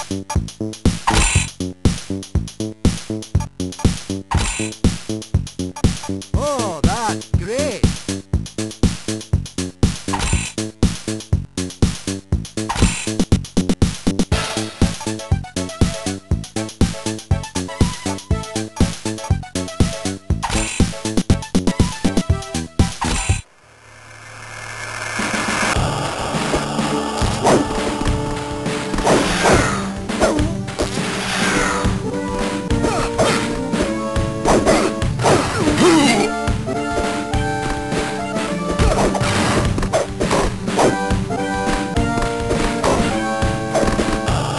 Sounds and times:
Music: 0:00.0 - 0:23.5, 0:25.2 - 0:44.5.

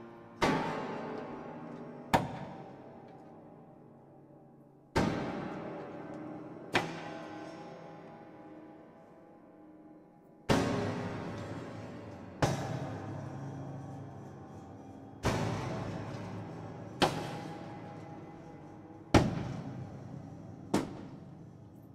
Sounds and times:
Hammer: 0:00.4 - 0:03.4, 0:04.9 - 0:08.2, 0:10.5 - 0:21.9.

